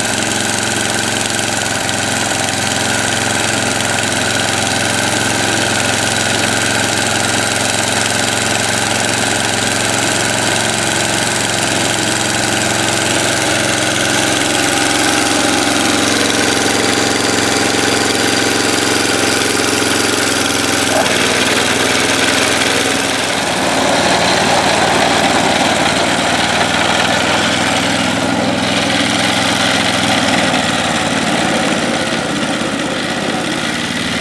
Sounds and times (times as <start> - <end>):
Lawn mower: 0.0 - 34.2.